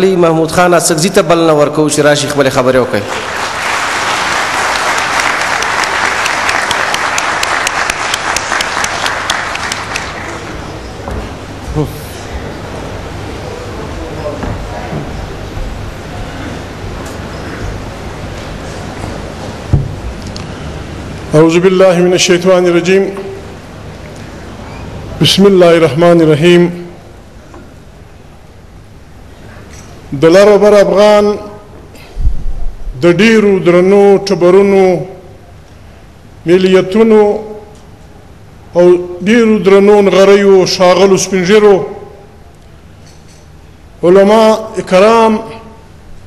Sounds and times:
Male speech, man speaking: 0:00.0 - 0:03.1, 0:11.7 - 0:12.2, 0:21.3 - 0:23.4, 0:25.2 - 0:26.9, 0:30.1 - 0:31.6, 0:33.0 - 0:35.2, 0:36.5 - 0:37.6, 0:38.8 - 0:42.1, 0:44.0 - 0:45.8
Narration, monologue: 0:00.0 - 0:03.5, 0:11.4 - 0:46.2.

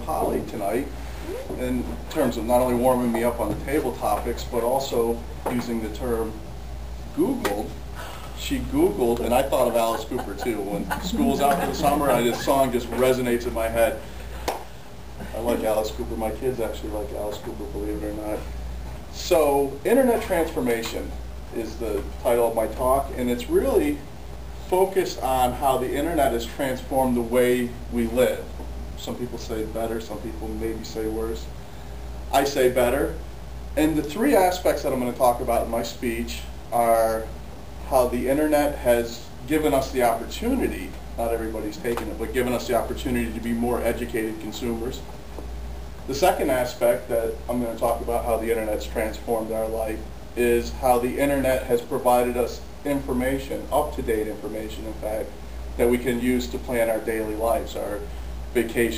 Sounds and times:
Male speech, man speaking: 0:00.0 - 0:00.9, 0:01.5 - 0:06.4, 0:07.2 - 0:07.8, 0:08.4 - 0:14.0, 0:15.3 - 0:18.5, 0:19.1 - 0:24.0, 0:24.6 - 0:31.5, 0:32.3 - 0:33.2, 0:33.8 - 0:45.1, 0:46.1 - 0:58.9
Narration, monologue: 0:00.0 - 0:58.9.

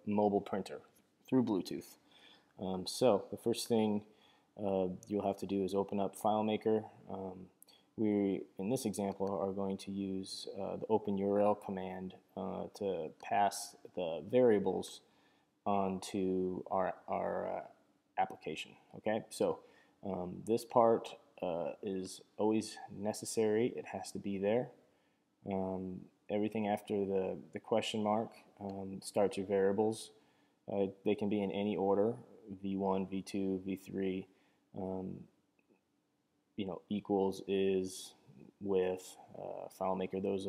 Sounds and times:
Speech: 0:00.0 - 0:02.0, 0:02.6 - 0:15.1, 0:15.7 - 0:24.8, 0:25.4 - 0:35.3, 0:36.6 - 0:40.4.

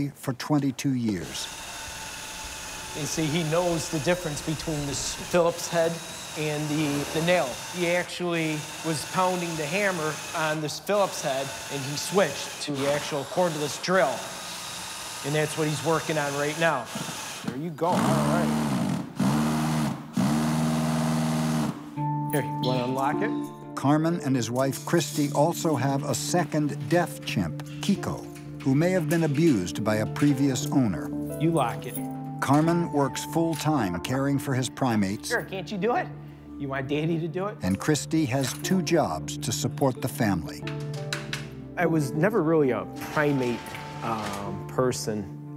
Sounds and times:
Drill: 0:01.1 - 0:21.9, 0:43.0 - 0:44.4.

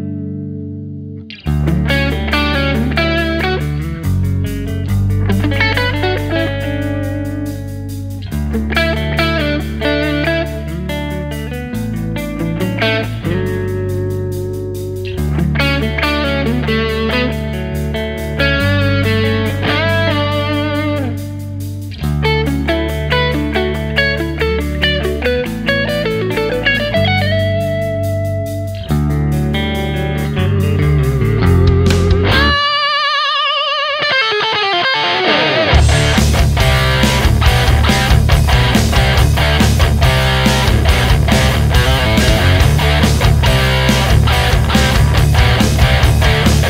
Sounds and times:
Music: 0:00.0 - 0:46.6.

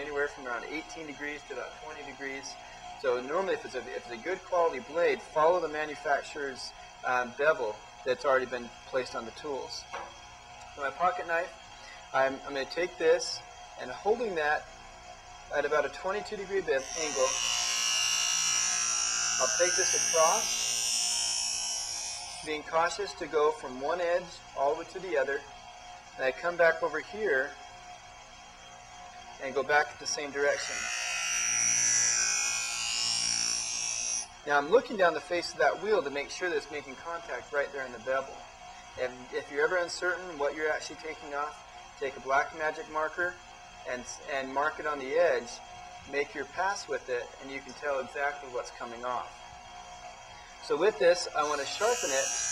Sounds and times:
Power tool: 0:13.2 - 0:26.2, 0:26.8 - 0:36.3, 0:49.1 - 0:52.5.

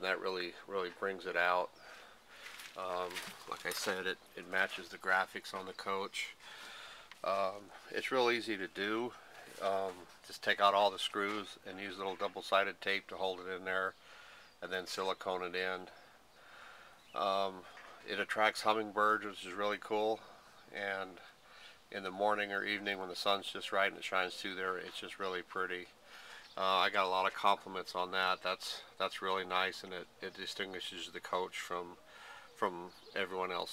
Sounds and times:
Speech: 0:00.0 - 0:01.7, 0:02.7 - 0:06.4, 0:07.2 - 0:14.0, 0:14.6 - 0:16.0, 0:17.2 - 0:21.3, 0:21.9 - 0:25.9, 0:26.6 - 0:33.7.

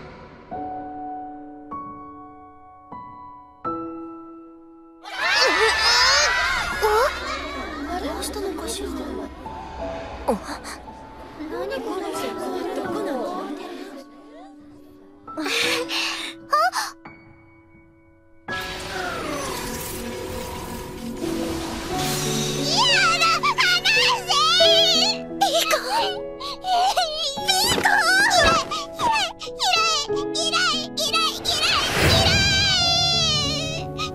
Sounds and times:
Music: 0:00.0 - 0:34.1
Speech: 0:22.8 - 0:31.9.

